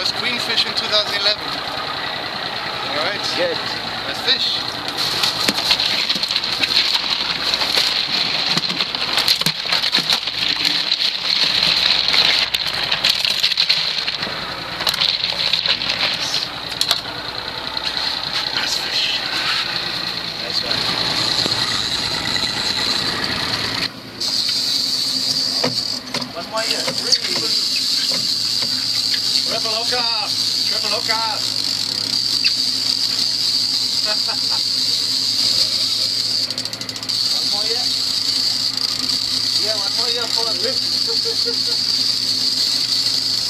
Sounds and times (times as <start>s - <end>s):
Speech: 0.0s - 1.4s, 2.9s - 4.6s, 20.4s - 20.8s, 26.4s - 27.6s, 29.5s - 31.5s, 37.3s - 38.0s, 39.6s - 40.9s
Idling: 0.0s - 43.4s
Outside, rural or natural: 0.0s - 43.4s.